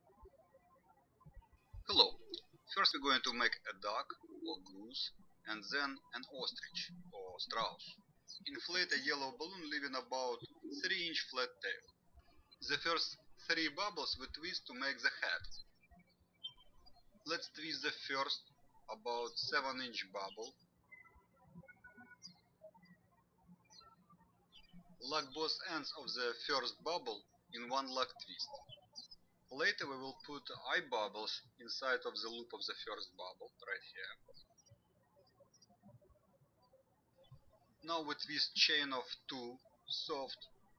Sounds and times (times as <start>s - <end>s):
Speech: 1.8s - 11.8s, 12.6s - 15.6s, 17.3s - 20.6s, 25.0s - 28.6s, 29.5s - 34.2s, 37.8s - 40.4s.